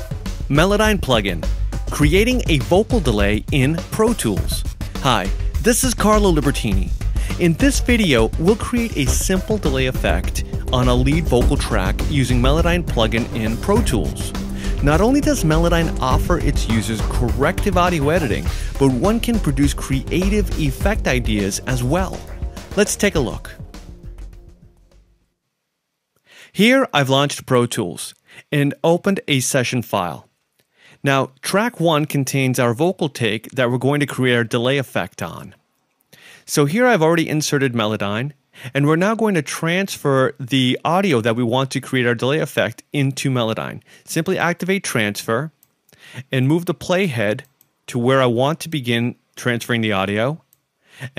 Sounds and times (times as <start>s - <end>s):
Speech: 0.0s - 23.6s, 26.6s - 30.3s, 31.0s - 35.6s, 36.5s - 45.6s, 46.2s - 51.1s.